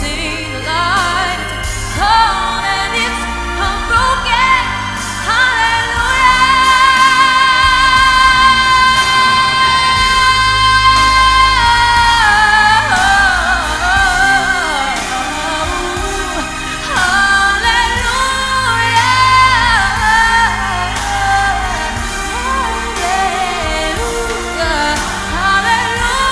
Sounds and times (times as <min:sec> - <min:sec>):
Female singing: 0:00.0 - 0:26.3
Music: 0:00.0 - 0:26.3.